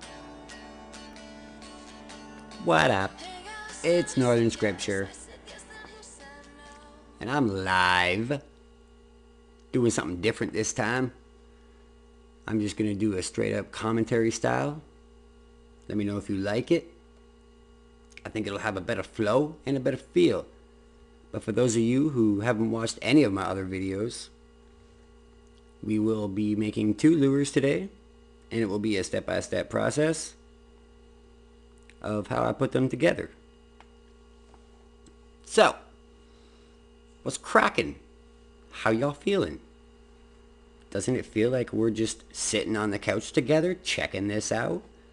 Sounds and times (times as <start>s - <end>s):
Speech: 2.6s - 3.2s, 3.8s - 5.2s, 7.2s - 8.5s, 9.7s - 11.2s, 12.4s - 14.9s, 15.9s - 17.0s, 18.2s - 20.6s, 21.3s - 24.4s, 25.8s - 30.4s, 32.0s - 33.4s, 35.5s - 36.0s, 37.2s - 38.1s, 38.7s - 39.7s, 40.9s - 44.9s.